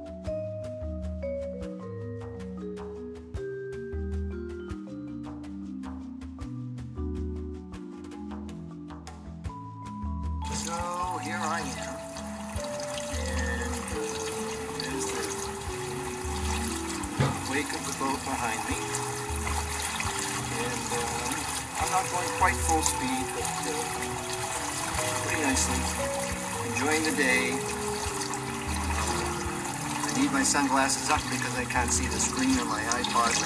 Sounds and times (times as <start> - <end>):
Music: 0.0 - 33.4
Speech: 10.5 - 12.0, 14.7 - 15.4, 17.4 - 19.0, 20.5 - 24.0, 25.2 - 26.0, 26.8 - 27.6, 30.1 - 33.4.